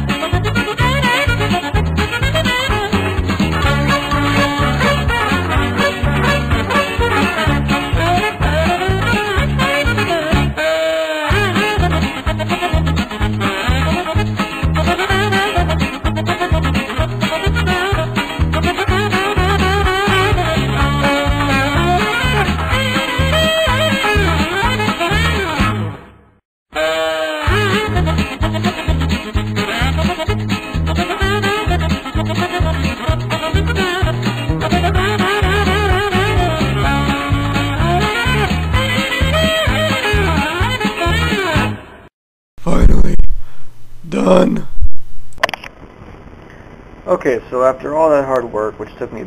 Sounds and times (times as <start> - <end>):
Music: 0.0 - 26.2, 26.8 - 42.1
Speech: 42.6 - 43.3, 44.0 - 44.7, 47.1 - 49.2.